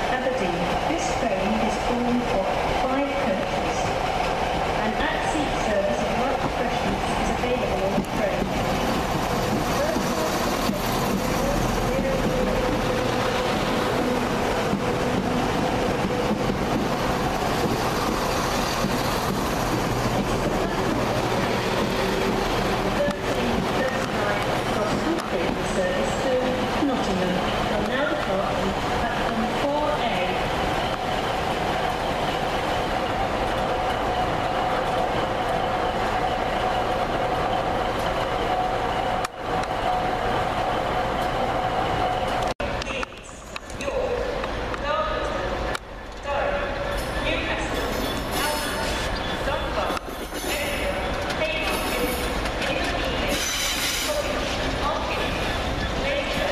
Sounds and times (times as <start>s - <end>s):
Railroad car, train wagon: 0.0s - 56.5s
Train: 0.0s - 56.5s
Clickety-clack: 6.0s - 12.7s, 13.5s - 26.2s, 49.8s - 54.7s.